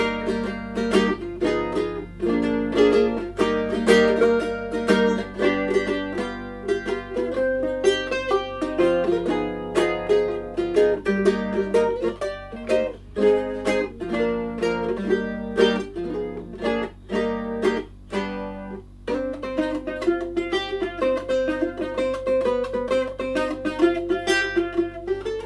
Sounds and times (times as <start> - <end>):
Ukulele: 0.0 - 25.4.